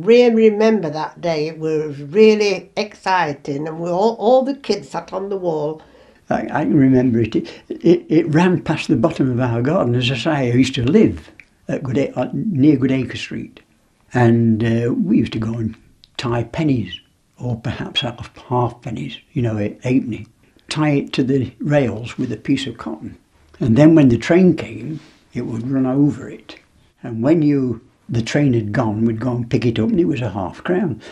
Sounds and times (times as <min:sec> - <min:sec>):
Speech: 0:00.0 - 0:31.1.